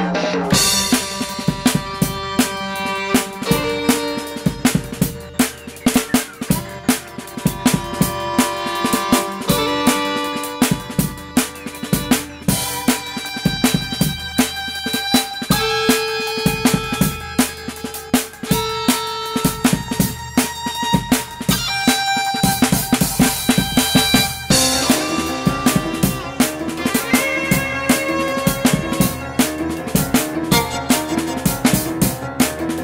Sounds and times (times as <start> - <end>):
Musical instrument: 0.0 - 32.8.